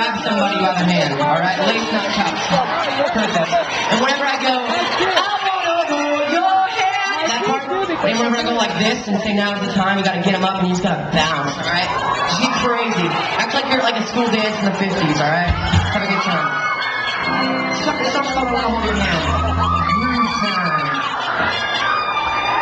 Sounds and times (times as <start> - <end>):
Speech: 0.0 - 2.8, 3.9 - 16.6, 17.8 - 21.1.